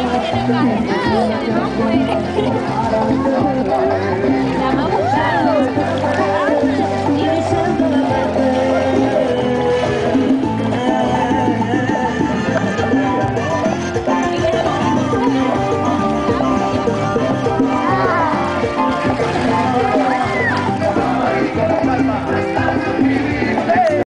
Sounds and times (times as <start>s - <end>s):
Music: 0.0s - 24.0s.